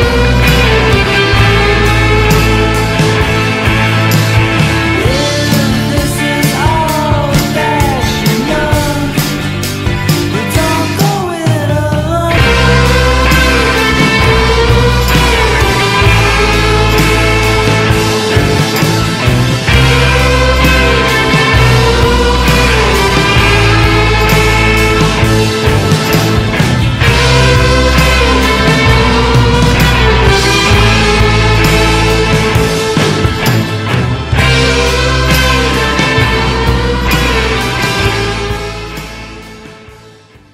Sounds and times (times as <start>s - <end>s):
Psychedelic rock: 0.0s - 40.5s.